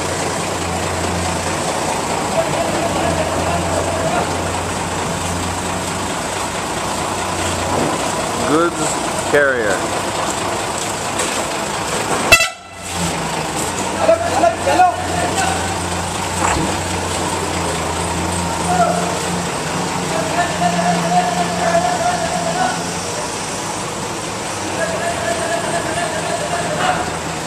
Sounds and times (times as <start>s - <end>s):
Truck: 0.0s - 27.4s.